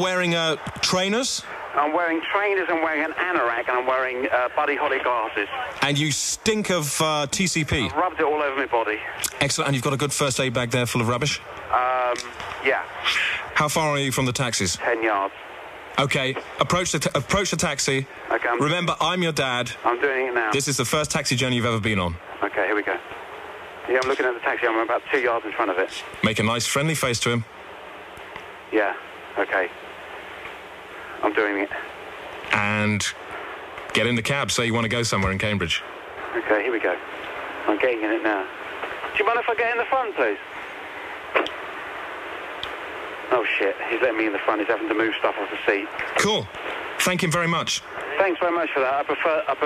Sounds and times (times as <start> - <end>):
Speech: 0.0 - 15.4, 16.0 - 23.0, 23.9 - 27.5, 28.8 - 29.7, 31.2 - 31.9, 32.5 - 33.2, 33.9 - 37.0, 37.7 - 38.5, 39.2 - 40.4, 43.3 - 49.6.